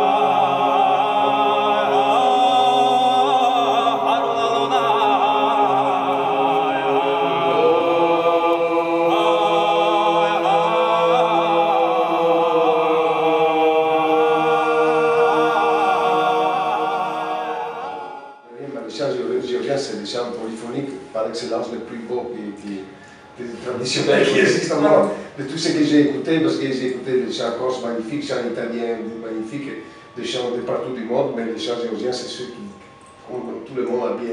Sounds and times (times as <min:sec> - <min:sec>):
Mantra: 0:00.0 - 0:34.3.